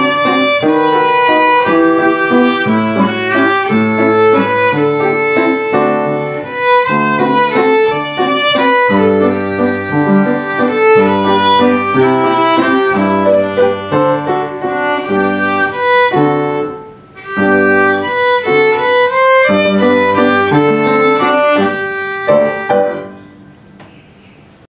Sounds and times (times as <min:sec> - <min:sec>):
Violin, fiddle: 0:00.0 - 0:23.3.